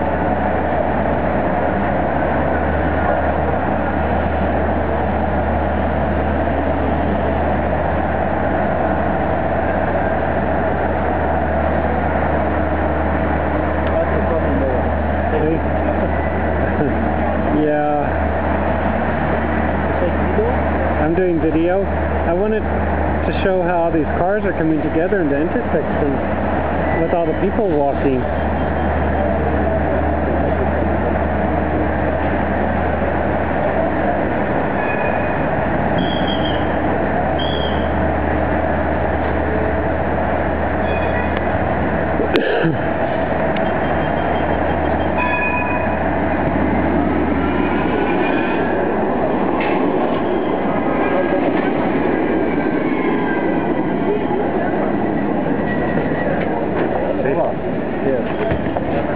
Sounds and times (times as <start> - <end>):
Speech: 16.8 - 18.2, 19.9 - 22.7, 23.3 - 26.2, 27.0 - 28.3, 57.2 - 59.1.